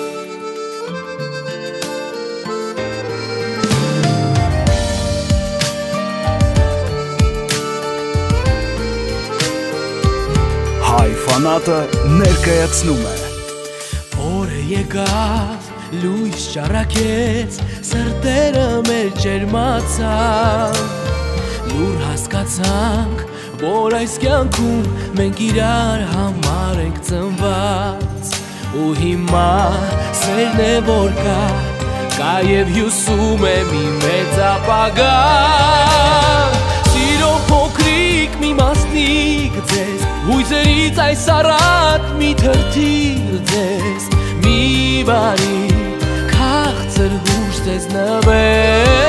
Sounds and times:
Music: 0:00.0 - 0:49.0.

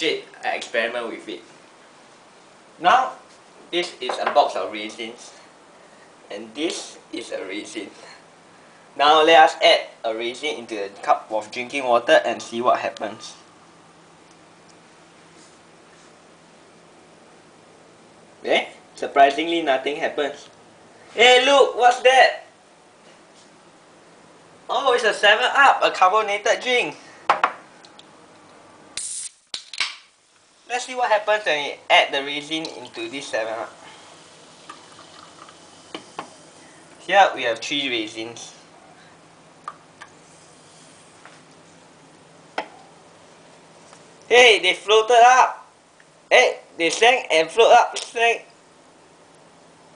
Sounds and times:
Speech: 0:00.0 - 0:01.5, 0:02.8 - 0:05.4, 0:06.3 - 0:08.2, 0:09.0 - 0:13.5, 0:18.4 - 0:20.5, 0:21.2 - 0:22.5, 0:24.7 - 0:27.0, 0:30.7 - 0:33.8, 0:37.0 - 0:38.7, 0:44.3 - 0:45.7, 0:46.3 - 0:48.5
Liquid: 0:32.6 - 0:33.0, 0:33.7 - 0:36.1
Water: 0:34.0 - 0:35.7.

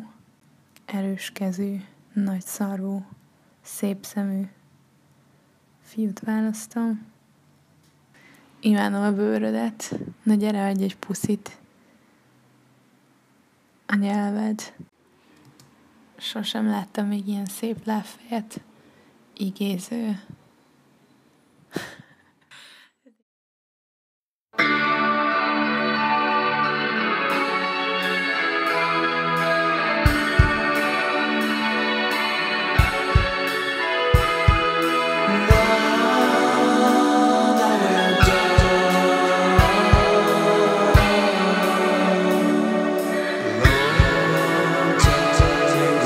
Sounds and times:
Speech: 0:00.9 - 0:04.6, 0:05.9 - 0:07.1, 0:08.6 - 0:11.6, 0:13.9 - 0:14.9, 0:16.2 - 0:18.7, 0:19.4 - 0:20.4.

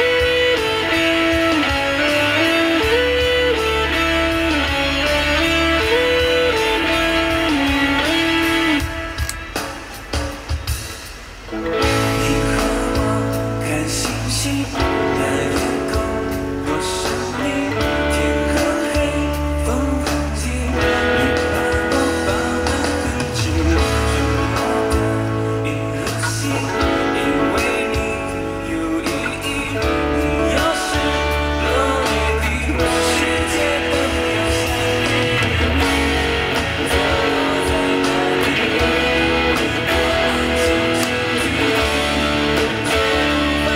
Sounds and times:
Electric guitar: 0:00.0 - 0:43.7.

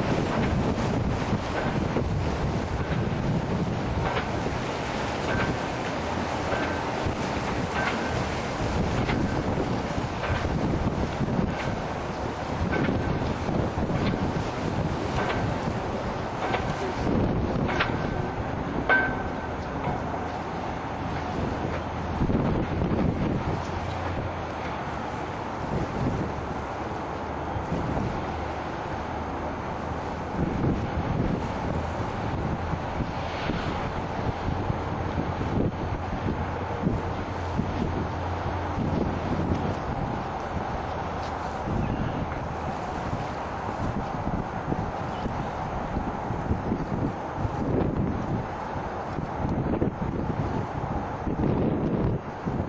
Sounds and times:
Wind noise (microphone): 0:00.0 - 0:20.2, 0:20.9 - 0:26.6, 0:27.5 - 0:28.7, 0:30.0 - 0:52.6
Motorboat, speedboat: 0:00.0 - 0:52.6.

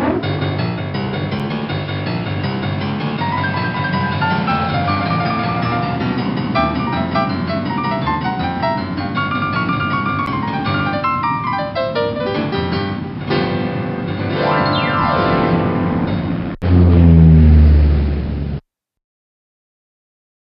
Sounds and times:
Background music: 0:00.0 - 0:16.6
Theme music: 0:00.0 - 0:17.6.

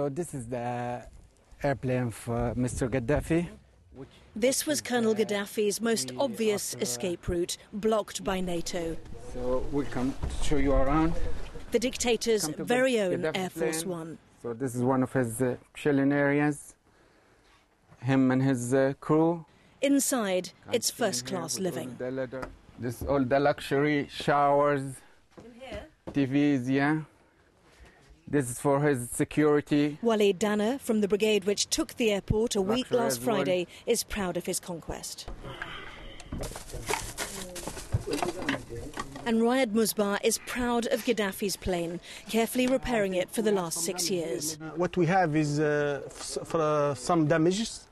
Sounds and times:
Speech: 0:30.5 - 0:35.2.

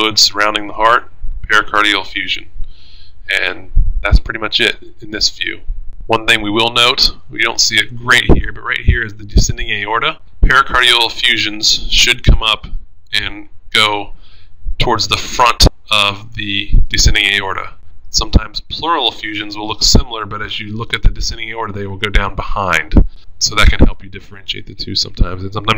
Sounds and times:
Speech: 0:00.0 - 0:02.5, 0:03.3 - 0:14.1, 0:14.8 - 0:25.7.

